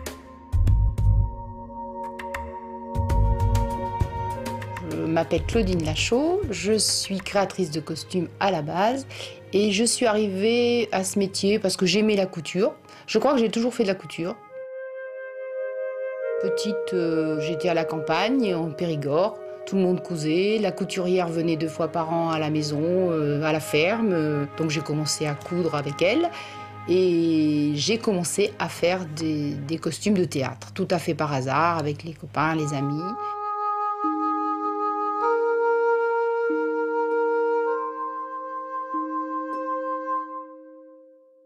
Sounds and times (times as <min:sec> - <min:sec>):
Music: 0:00.0 - 0:41.4
Speech: 0:04.8 - 0:14.4, 0:16.4 - 0:33.2.